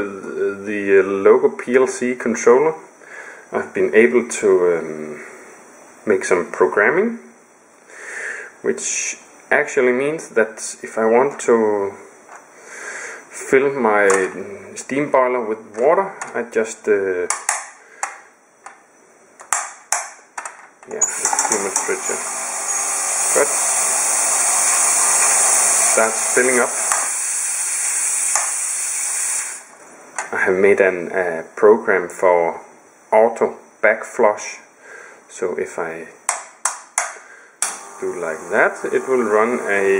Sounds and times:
Hiss: 21.1s - 29.8s.

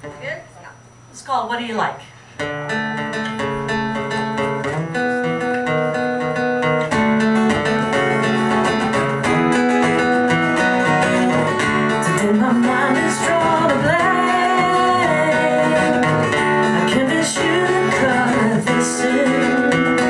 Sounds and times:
Music: 2.4s - 20.0s.

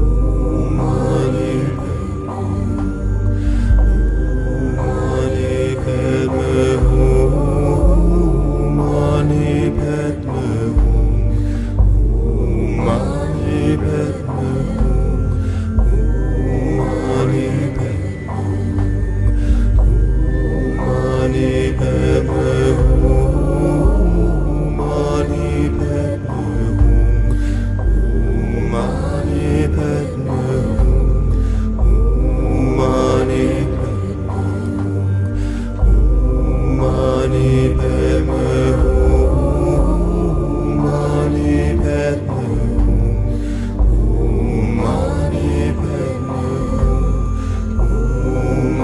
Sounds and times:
Mantra: 0.0s - 48.8s.

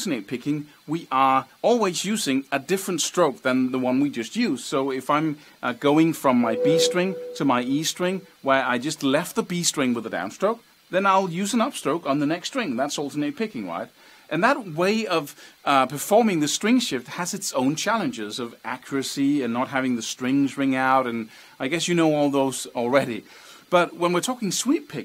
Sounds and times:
Speech: 0.0s - 25.0s
Music: 6.6s - 8.2s.

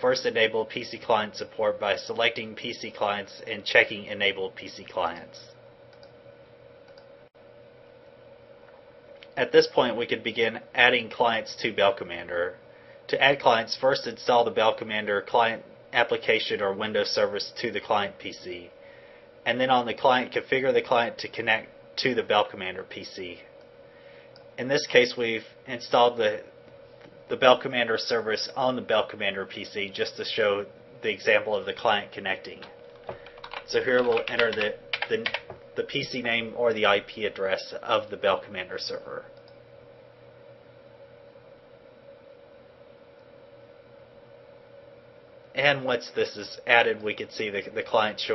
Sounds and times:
Speech: 0.0s - 5.6s, 9.4s - 18.7s, 19.5s - 23.5s, 24.6s - 26.5s, 27.3s - 32.7s, 33.7s - 39.3s, 45.6s - 48.3s.

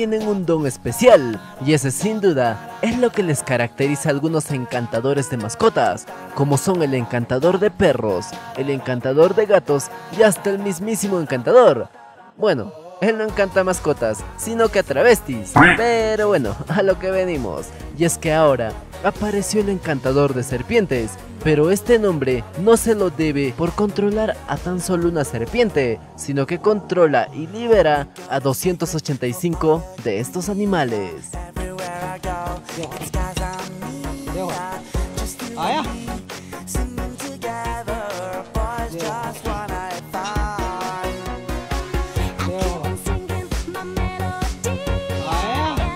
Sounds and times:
Speech: 0.0s - 31.3s, 34.4s - 34.7s, 35.5s - 36.0s, 45.2s - 45.9s
Music: 0.0s - 45.9s
Animal: 15.6s - 15.9s.

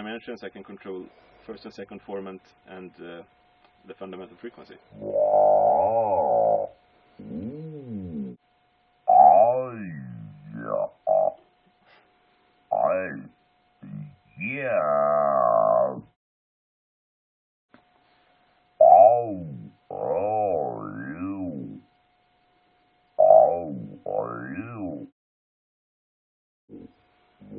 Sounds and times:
Speech synthesizer: 9.1s - 11.3s, 12.7s - 16.1s, 18.8s - 21.8s, 23.2s - 25.1s.

